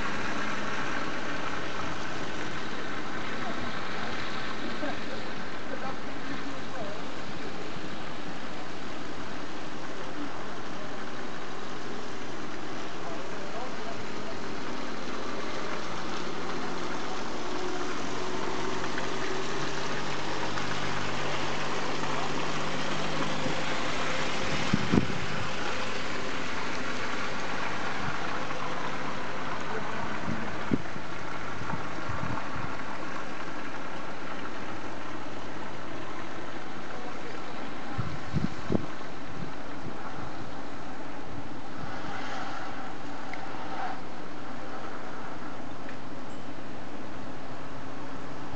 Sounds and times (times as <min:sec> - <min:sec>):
Car: 0:00.0 - 0:48.5.